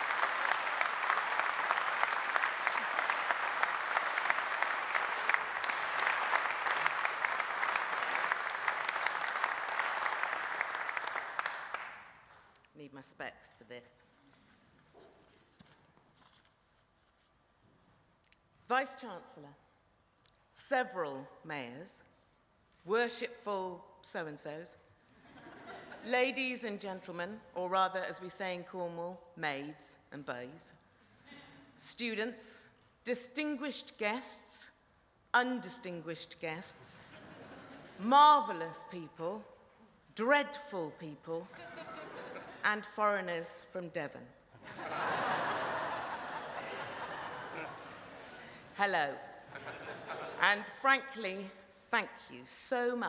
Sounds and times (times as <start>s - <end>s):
Narration, monologue: 12.2s - 15.5s, 16.6s - 45.3s, 47.6s - 53.0s
Female speech, woman speaking: 12.8s - 14.1s, 18.7s - 19.6s, 20.6s - 22.0s, 22.9s - 24.8s, 26.0s - 30.7s, 31.8s - 34.8s, 35.4s - 37.2s, 38.0s - 39.5s, 40.2s - 41.6s, 42.6s - 44.3s, 48.8s - 49.3s, 50.4s - 53.0s.